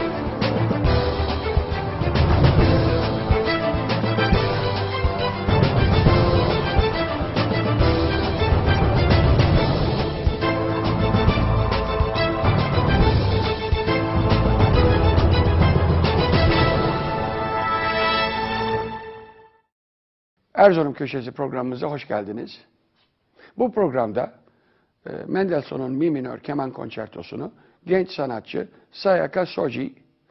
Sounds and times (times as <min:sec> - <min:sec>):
Speech: 0:20.5 - 0:22.7, 0:23.6 - 0:24.4, 0:25.0 - 0:30.0.